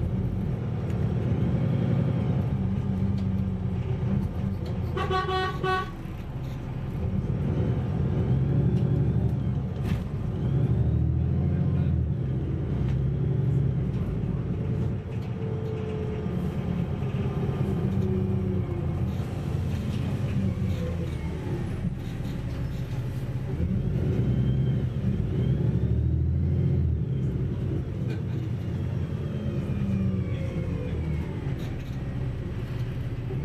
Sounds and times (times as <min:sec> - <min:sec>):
Bus: 0:00.0 - 0:33.4.